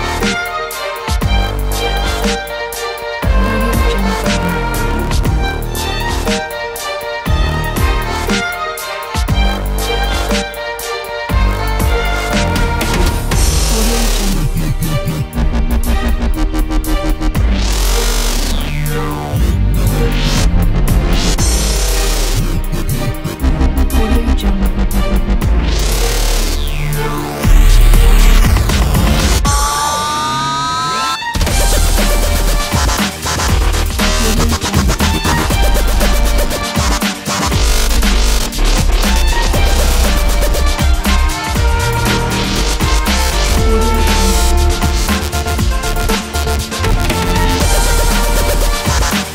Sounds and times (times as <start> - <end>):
Dubstep: 0.0 - 49.3.